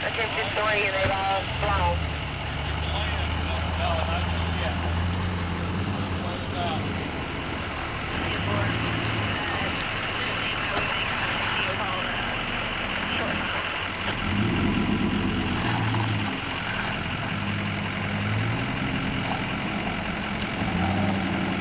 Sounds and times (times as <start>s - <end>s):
Speech: 0.0s - 2.0s, 2.6s - 4.8s, 8.1s - 13.7s
Car: 0.0s - 21.6s.